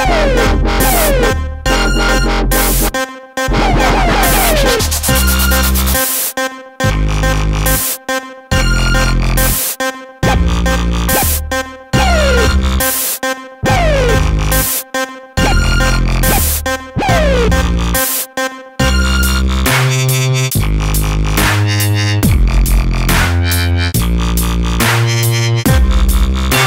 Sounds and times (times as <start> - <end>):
Electronic music: 0.0 - 26.6.